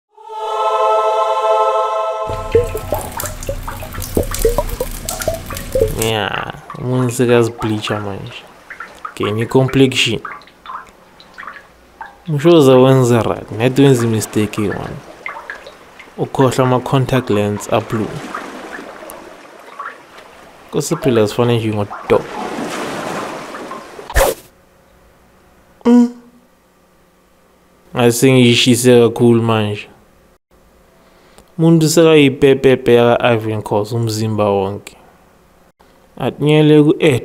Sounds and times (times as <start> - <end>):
Liquid: 2.3 - 12.4, 13.0 - 24.2
Speech: 6.0 - 8.4, 9.2 - 10.3, 12.3 - 15.0, 16.2 - 18.2, 20.7 - 22.3, 27.9 - 30.0, 31.6 - 35.0, 36.2 - 37.2.